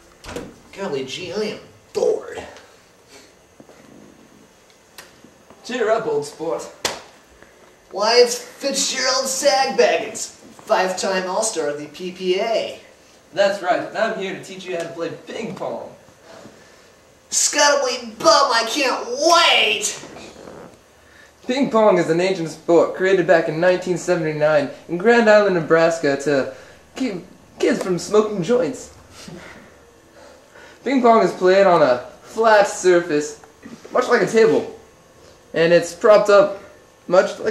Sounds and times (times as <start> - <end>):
Speech: 0.7 - 2.7, 5.6 - 6.8, 7.9 - 16.0, 17.3 - 20.3, 21.5 - 29.0, 30.8 - 34.8, 35.5 - 37.5.